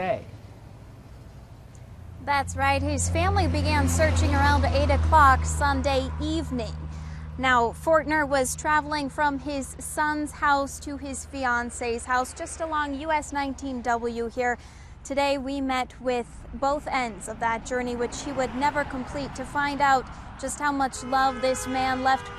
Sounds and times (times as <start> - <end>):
Vehicle: 0.0 - 22.3.